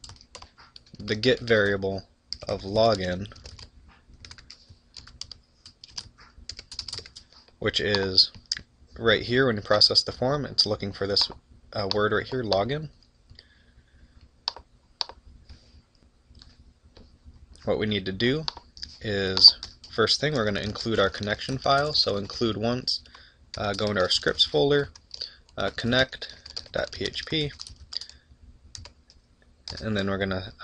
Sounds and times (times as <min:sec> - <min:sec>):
Speech: 0:01.0 - 0:03.4, 0:07.6 - 0:08.4, 0:09.0 - 0:13.0, 0:17.6 - 0:25.0, 0:25.6 - 0:27.6, 0:29.7 - 0:30.6.